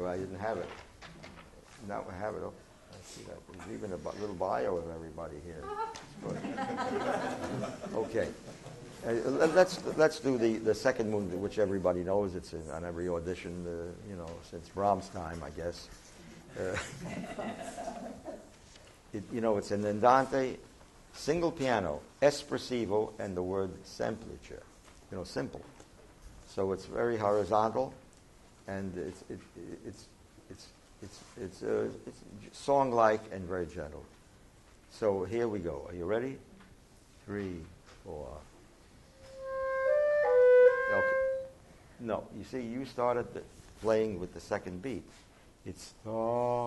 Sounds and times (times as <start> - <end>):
Speech: 0.0 - 0.8, 1.8 - 6.5, 7.9 - 8.4, 9.0 - 15.9, 16.6 - 16.9, 19.2 - 20.6, 21.2 - 25.7, 26.5 - 28.0, 28.7 - 34.1, 34.9 - 36.5, 37.2 - 38.5, 42.0 - 46.6.